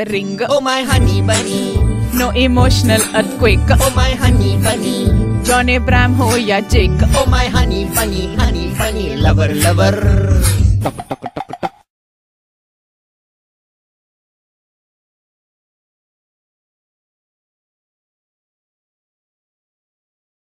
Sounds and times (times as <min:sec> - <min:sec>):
Music: 0:00.0 - 0:11.4.